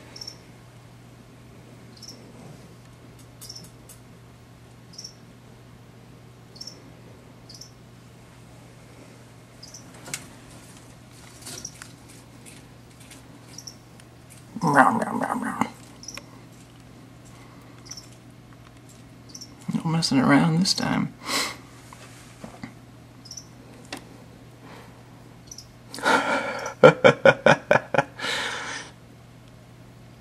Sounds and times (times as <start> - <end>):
Mouse: 0.2 - 0.4, 1.9 - 2.2, 3.4 - 3.8, 4.9 - 5.2, 6.6 - 6.8, 7.5 - 7.8, 9.6 - 9.9, 13.5 - 13.8, 16.0 - 16.3, 17.8 - 18.2, 19.3 - 19.6, 23.2 - 23.5, 25.4 - 25.7.